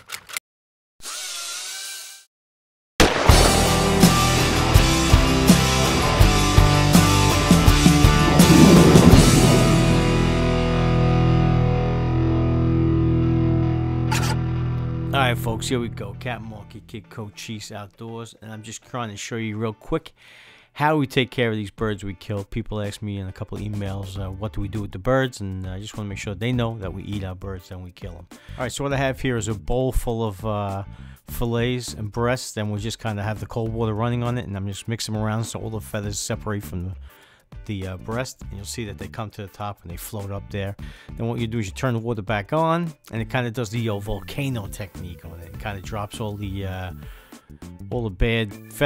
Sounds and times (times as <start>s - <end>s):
Speech: 15.1s - 20.1s, 20.8s - 37.0s, 37.6s - 47.0s, 47.8s - 48.8s.